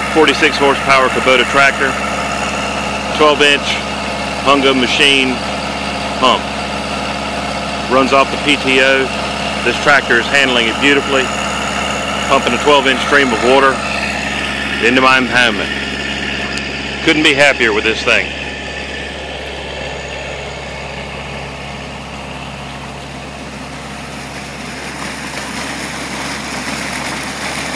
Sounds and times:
Speech: 0:00.1 - 0:02.0, 0:03.1 - 0:03.8, 0:04.4 - 0:05.4, 0:06.2 - 0:06.5, 0:07.9 - 0:11.3, 0:12.3 - 0:13.8, 0:14.8 - 0:15.7, 0:16.4 - 0:18.4.

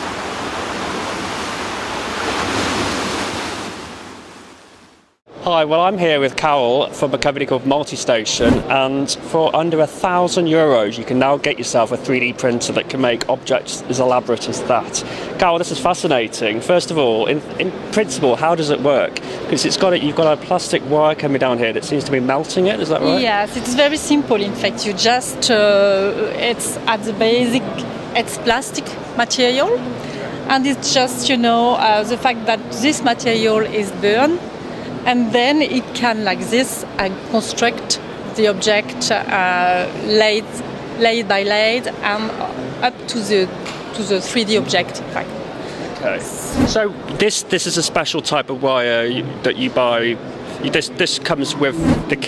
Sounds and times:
Speech: 0:05.4 - 0:29.8.

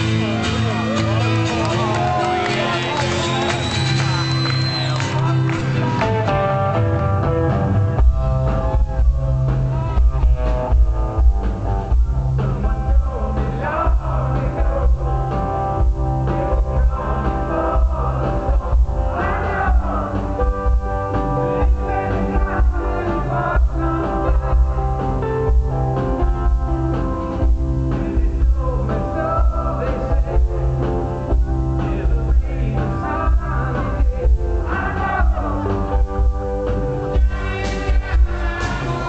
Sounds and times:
Music: 0:00.0 - 0:39.0.

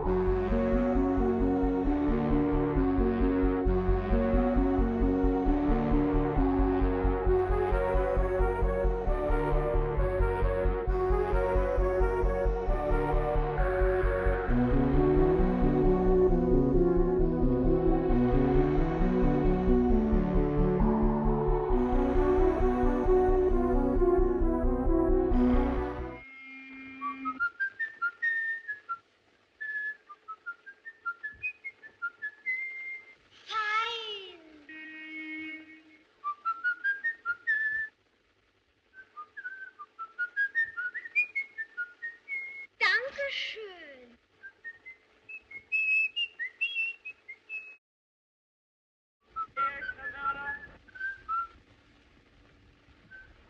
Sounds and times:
Music: 0:00.0 - 0:29.1.

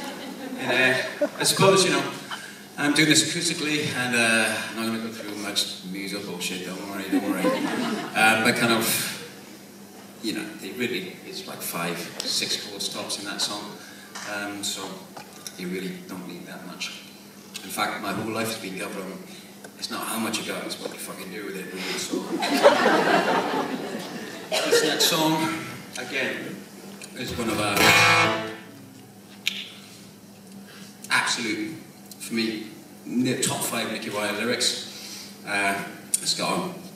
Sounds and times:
Speech: 0:00.6 - 0:02.2, 0:02.8 - 0:07.6, 0:08.2 - 0:09.2, 0:10.2 - 0:17.0, 0:17.6 - 0:22.4, 0:24.7 - 0:26.6, 0:27.2 - 0:27.8, 0:31.1 - 0:34.9, 0:35.5 - 0:36.9
Acoustic guitar: 0:27.3 - 0:28.8.

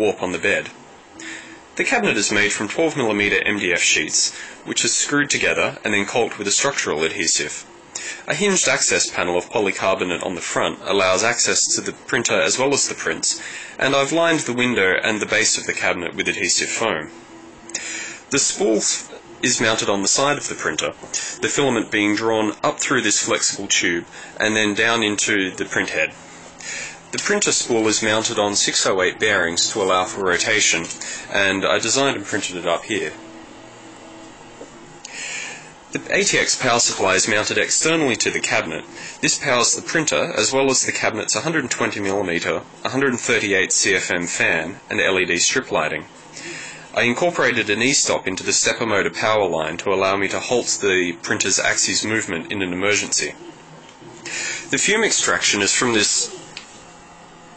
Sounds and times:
Speech: 0:00.0 - 0:00.8, 0:01.8 - 0:17.2, 0:18.3 - 0:26.2, 0:27.1 - 0:33.2, 0:35.9 - 0:46.1, 0:46.9 - 0:53.4, 0:54.7 - 0:56.5.

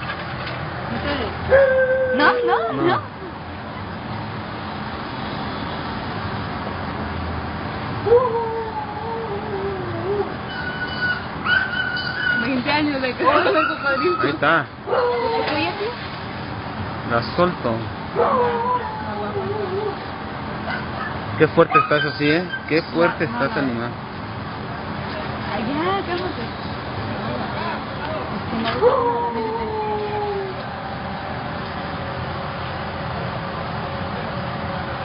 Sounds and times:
Whimper (dog): 0:01.5 - 0:03.0, 0:08.1 - 0:12.5, 0:13.3 - 0:15.9, 0:18.2 - 0:20.0, 0:20.7 - 0:22.7, 0:28.8 - 0:30.6
Yip: 0:10.6 - 0:12.5, 0:20.7 - 0:22.7.

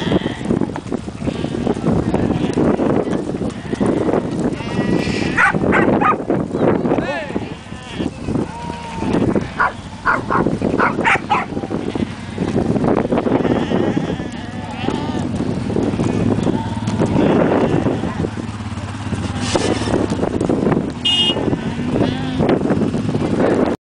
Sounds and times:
Bleat: 0:00.0 - 0:00.5, 0:01.2 - 0:02.8, 0:03.6 - 0:05.4, 0:07.4 - 0:10.4, 0:11.8 - 0:12.5, 0:13.3 - 0:15.3, 0:16.0 - 0:18.2, 0:21.6 - 0:22.6.

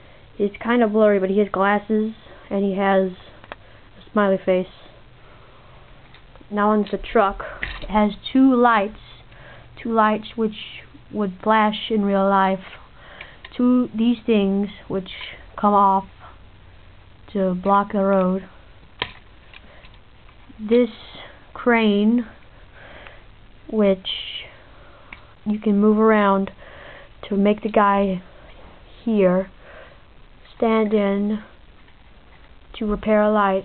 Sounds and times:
Speech: 0:00.4 - 0:03.4, 0:04.0 - 0:04.9, 0:06.5 - 0:09.2, 0:09.8 - 0:12.8, 0:13.5 - 0:16.1, 0:17.3 - 0:18.5, 0:20.6 - 0:22.4, 0:23.7 - 0:24.6, 0:25.4 - 0:26.6, 0:27.2 - 0:28.3, 0:29.0 - 0:29.5, 0:30.5 - 0:31.6, 0:32.7 - 0:33.6.

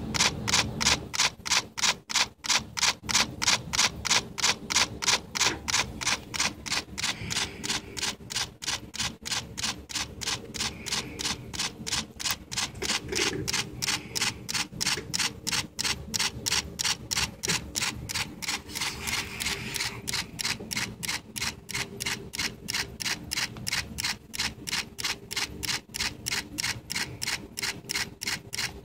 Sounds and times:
Camera: 0:00.1 - 0:28.8.

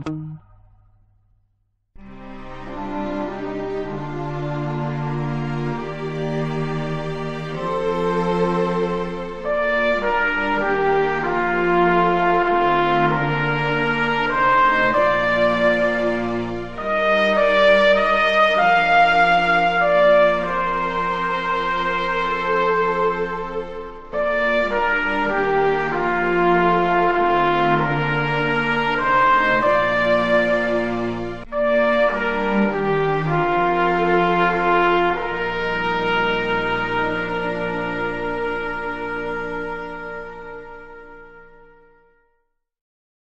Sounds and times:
French horn: 0:02.0 - 0:42.4.

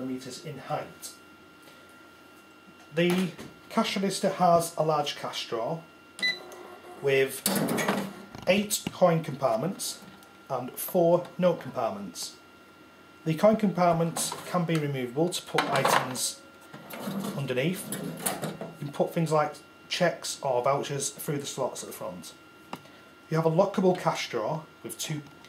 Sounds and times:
Speech: 0:00.0 - 0:01.2, 0:02.9 - 0:05.9, 0:07.0 - 0:07.5, 0:08.4 - 0:12.4, 0:13.2 - 0:16.4, 0:17.2 - 0:17.9, 0:18.8 - 0:22.4, 0:23.3 - 0:25.3.

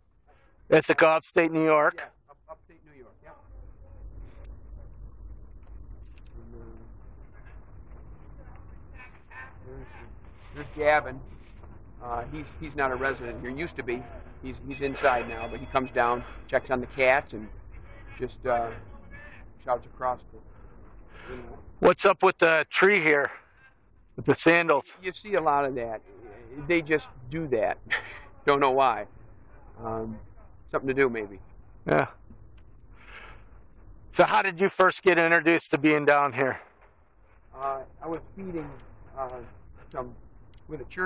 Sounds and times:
Speech: 0:00.7 - 0:03.5, 0:06.3 - 0:06.9, 0:09.6 - 0:11.2, 0:12.0 - 0:17.5, 0:18.1 - 0:20.4, 0:21.2 - 0:23.4, 0:24.2 - 0:29.1, 0:29.8 - 0:32.1, 0:34.2 - 0:36.6, 0:37.6 - 0:41.0.

